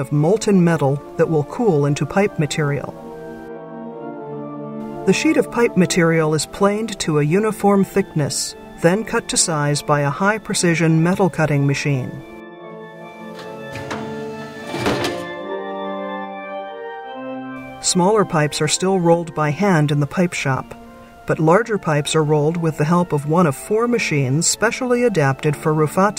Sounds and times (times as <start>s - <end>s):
Speech: 0.0s - 3.0s, 5.1s - 12.2s, 17.8s - 26.1s
Musical instrument: 1.1s - 20.0s
Thunk: 14.7s - 15.3s.